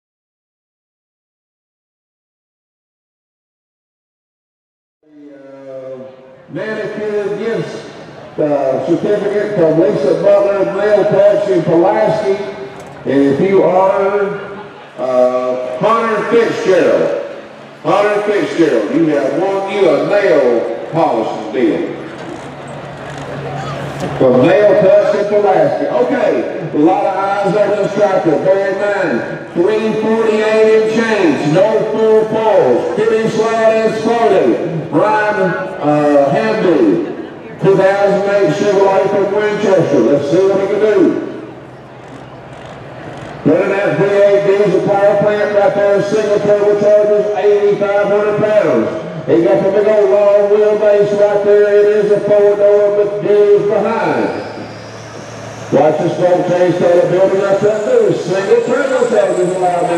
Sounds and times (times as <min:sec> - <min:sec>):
Speech: 0:05.0 - 0:22.1, 0:23.3 - 0:41.3, 0:43.4 - 0:54.5, 0:55.7 - 0:59.9
Truck: 0:05.4 - 0:59.9.